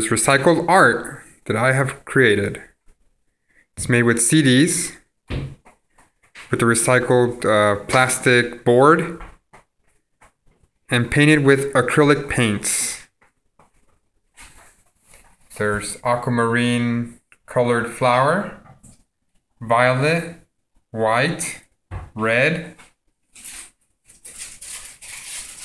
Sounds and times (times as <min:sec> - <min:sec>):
Speech: 0:00.0 - 0:02.7, 0:03.8 - 0:05.0, 0:06.5 - 0:09.2, 0:10.9 - 0:13.1, 0:15.5 - 0:18.6, 0:19.6 - 0:22.8.